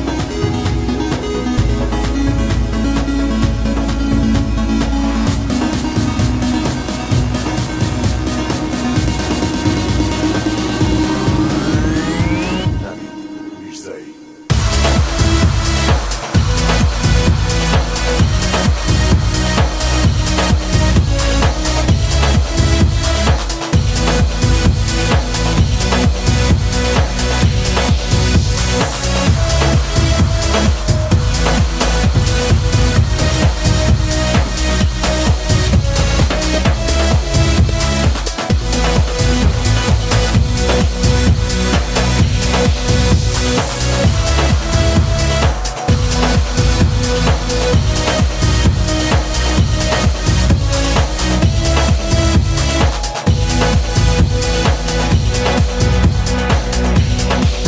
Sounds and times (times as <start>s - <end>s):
House music: 0.0s - 57.6s.